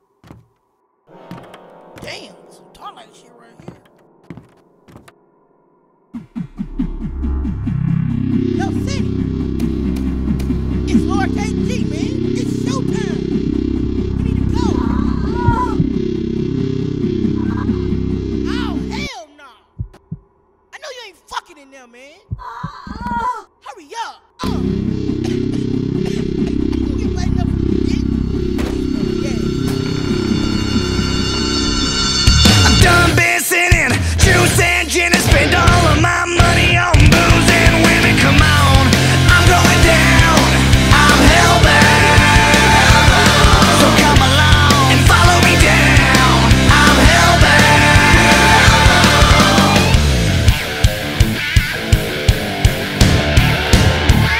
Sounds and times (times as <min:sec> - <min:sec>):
Speech: 0:02.0 - 0:03.8, 0:08.6 - 0:09.0, 0:10.9 - 0:13.2, 0:14.2 - 0:15.8, 0:18.5 - 0:19.7, 0:20.8 - 0:24.7, 0:26.8 - 0:28.0
Pop music: 0:32.3 - 0:50.6.